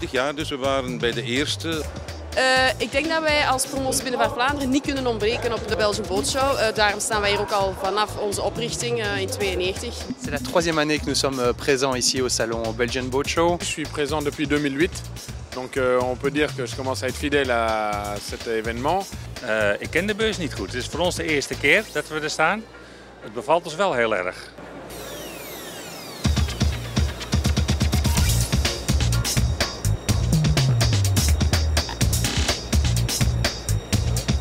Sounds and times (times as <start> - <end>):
Speech: 0.0 - 14.9, 15.6 - 22.6
Music: 0.0 - 23.1, 25.0 - 34.4.